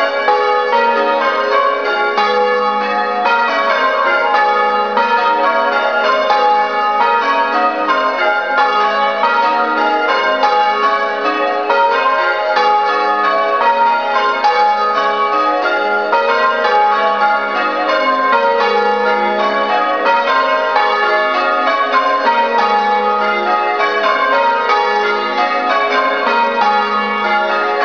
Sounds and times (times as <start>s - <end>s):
Church bell: 0.0s - 27.8s.